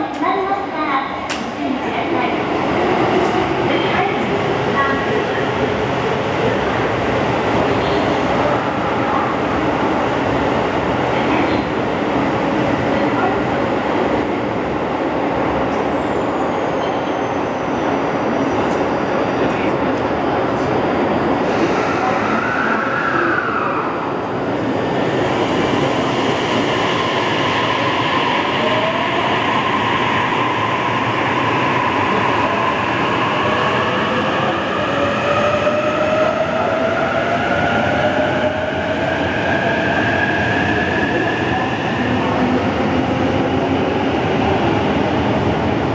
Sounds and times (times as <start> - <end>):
Subway, metro, underground: 0.0 - 45.9
Train: 0.0 - 45.9.